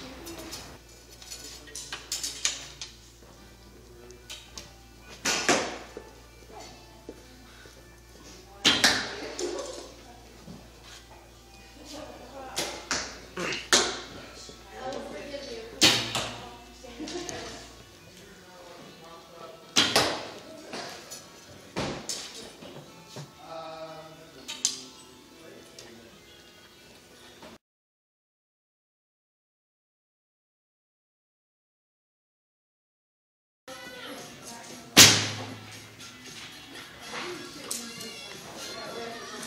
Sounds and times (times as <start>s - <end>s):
Inside, large room or hall: 0.0s - 11.2s, 14.8s - 18.9s, 19.7s - 25.0s, 33.7s - 39.4s.